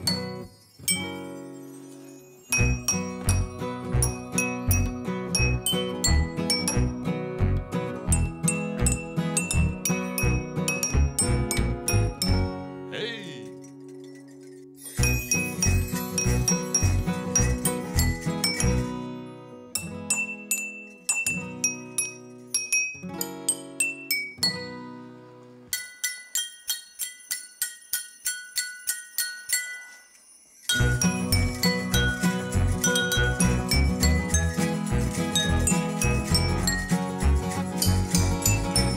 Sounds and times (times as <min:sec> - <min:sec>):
Glass: 0:00.0 - 0:07.0, 0:08.1 - 0:12.6, 0:13.4 - 0:19.1, 0:19.8 - 0:24.9, 0:25.7 - 0:38.9
Music: 0:00.0 - 0:38.9.